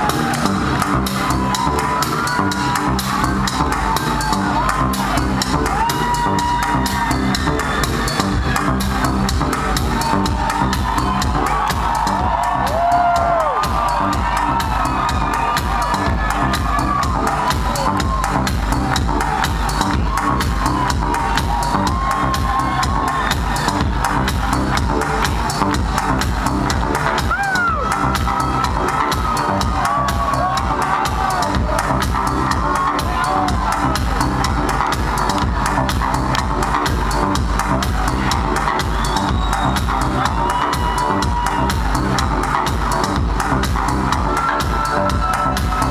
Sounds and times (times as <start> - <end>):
Cheering: 0.0 - 45.9
Music: 0.0 - 45.9.